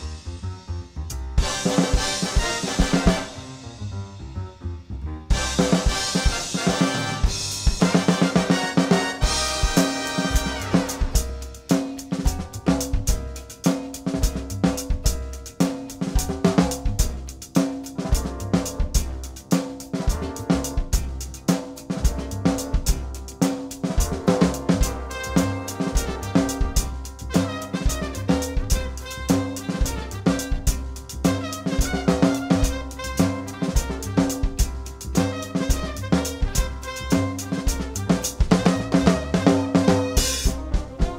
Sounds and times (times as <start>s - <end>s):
Rimshot: 0.0s - 4.1s, 5.3s - 41.1s
Bass drum: 0.0s - 41.1s
Drum kit: 0.0s - 41.1s.